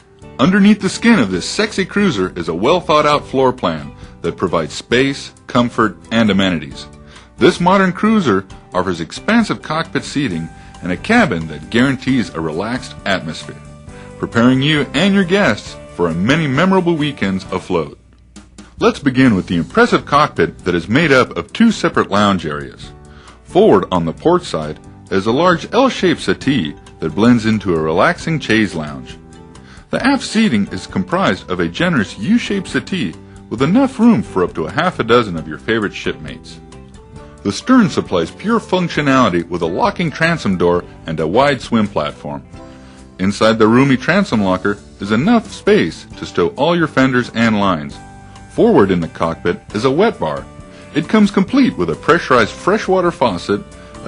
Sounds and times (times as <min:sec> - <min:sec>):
Music: 0:00.0 - 0:54.0
Speech: 0:00.4 - 0:18.0, 0:18.8 - 0:22.9, 0:23.5 - 0:29.2, 0:29.9 - 0:36.6, 0:37.4 - 0:42.5, 0:43.2 - 0:48.0, 0:48.6 - 0:54.0.